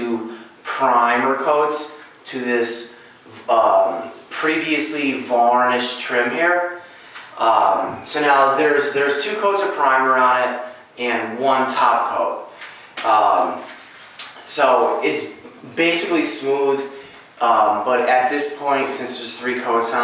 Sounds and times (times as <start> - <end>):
Speech: 0.0 - 20.0.